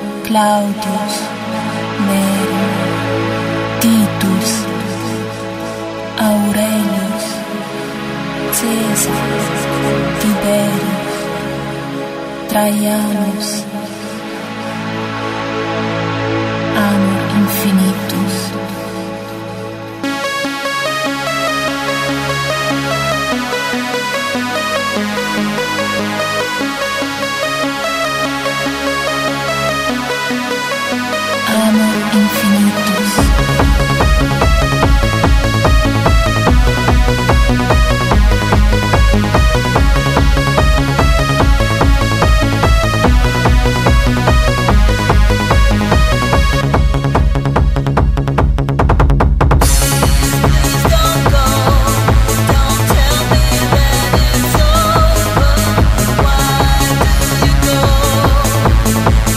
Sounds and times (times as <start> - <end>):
Techno: 0.0 - 59.3.